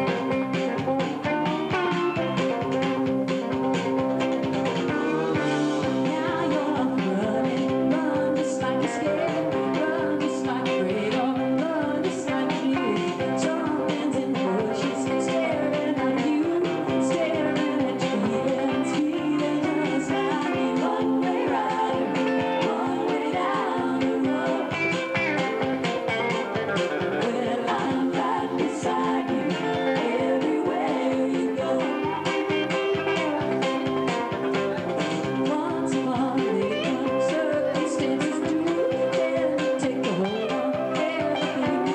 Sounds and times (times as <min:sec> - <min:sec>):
Acoustic guitar: 0:00.0 - 0:41.9.